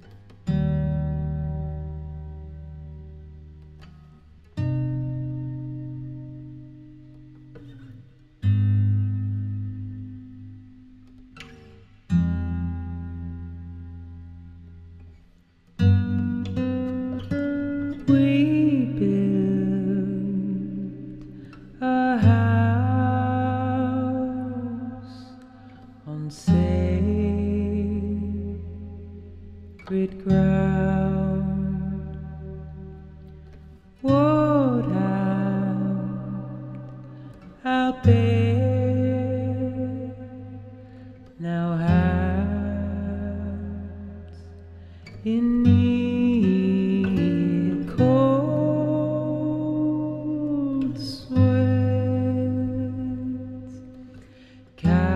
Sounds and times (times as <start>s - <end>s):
Music: 0.0s - 55.1s.